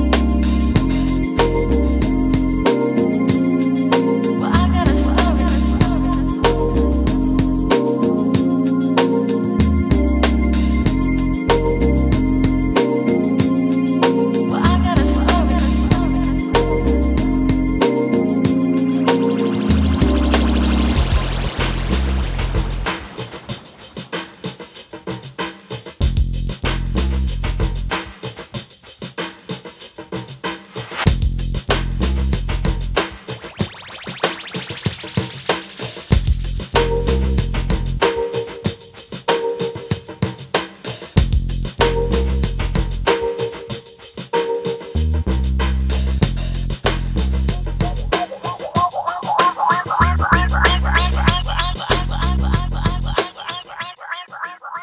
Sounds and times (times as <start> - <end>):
Drum machine: 0.0 - 3.6, 4.3 - 8.7, 14.6 - 26.8, 30.6 - 44.1, 46.2 - 54.8.